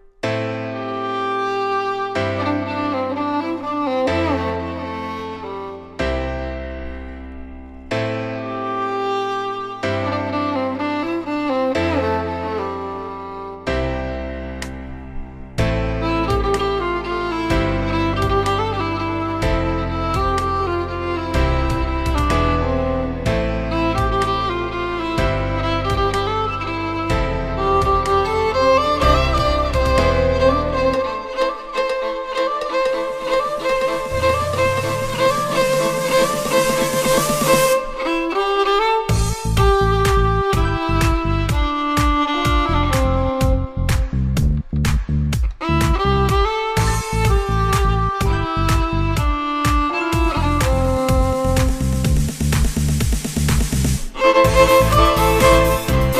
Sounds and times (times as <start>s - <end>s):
Violin, fiddle: 0.2s - 14.8s, 15.6s - 52.8s, 54.1s - 56.1s.